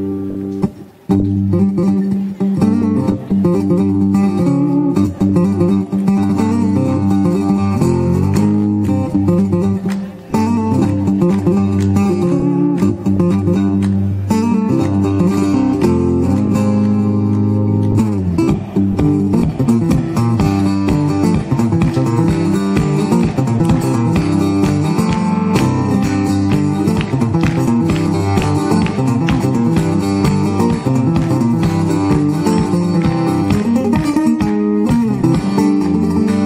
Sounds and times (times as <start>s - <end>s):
Music: 0.0s - 36.4s.